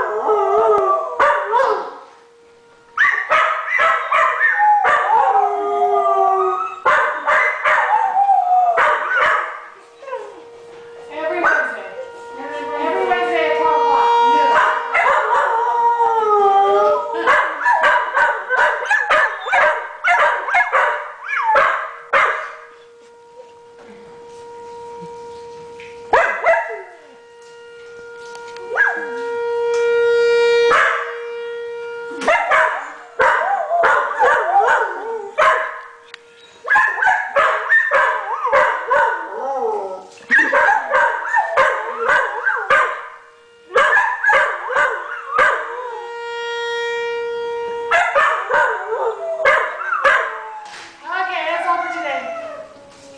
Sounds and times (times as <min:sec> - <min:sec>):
Siren: 0:00.0 - 0:53.1.